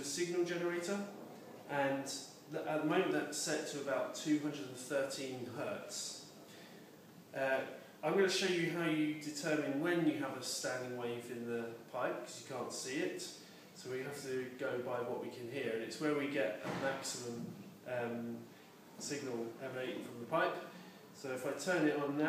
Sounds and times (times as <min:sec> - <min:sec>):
Speech: 0:00.0 - 0:06.3, 0:07.3 - 0:22.2.